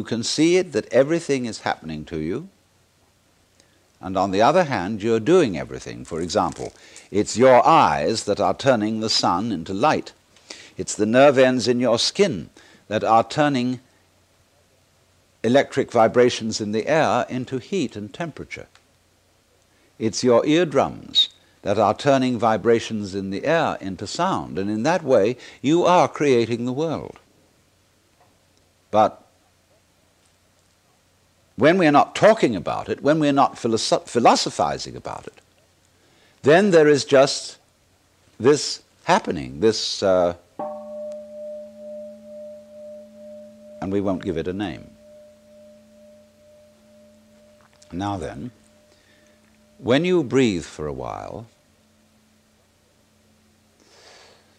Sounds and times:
Speech: 0.0 - 2.5, 4.0 - 10.2, 10.8 - 13.9, 15.5 - 18.8, 20.0 - 27.2, 29.0 - 29.3, 31.6 - 35.4, 36.4 - 37.6, 38.4 - 40.4, 43.8 - 44.9, 47.9 - 48.5, 49.9 - 51.5
Music: 40.6 - 48.0.

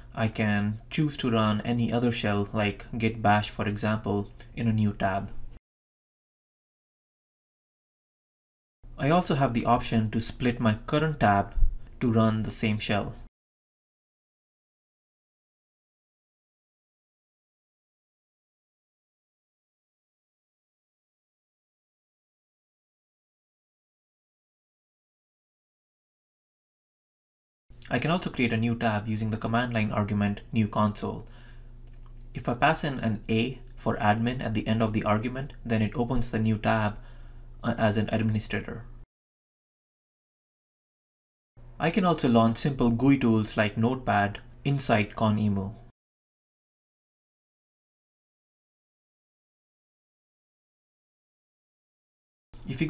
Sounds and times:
Speech: 0.1 - 5.4, 9.0 - 13.3, 27.8 - 31.3, 32.4 - 37.0, 37.6 - 38.9, 41.8 - 45.9, 52.6 - 52.8.

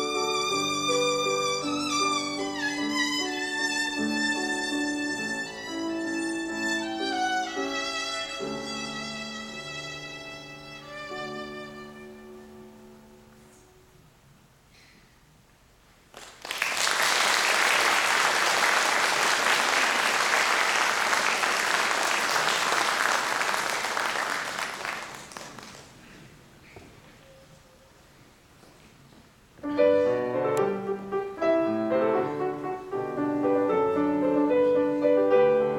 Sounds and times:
Violin, fiddle: 0.0 - 13.0.

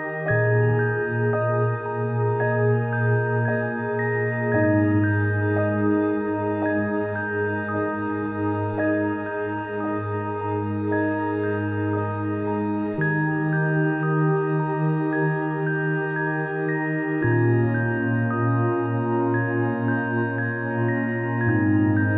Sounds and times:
Music: 0.0 - 22.1.

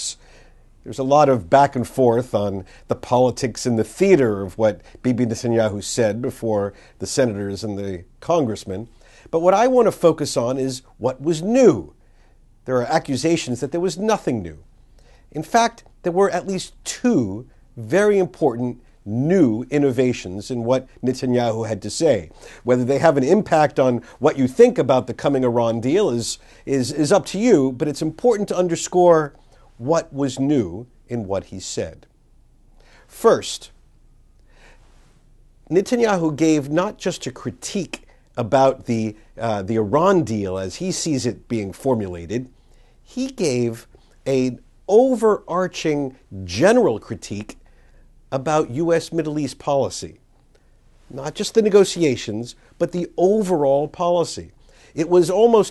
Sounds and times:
Male speech, man speaking: 0.0 - 0.2, 0.9 - 12.0, 12.7 - 14.6, 15.3 - 32.1, 33.1 - 33.8, 35.7 - 42.5, 43.1 - 47.6, 48.3 - 50.2, 51.1 - 55.7
Narration, monologue: 0.0 - 55.7.

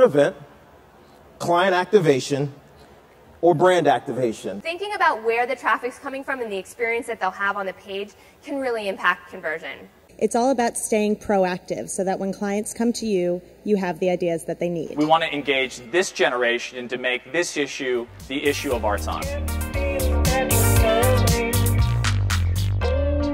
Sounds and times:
Speech: 8.9 - 19.3.

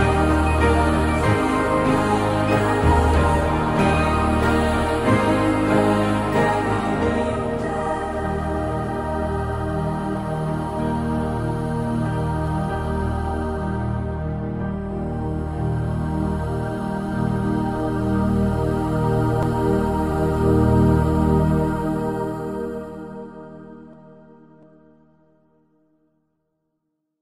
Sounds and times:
New-age music: 0.0 - 25.6.

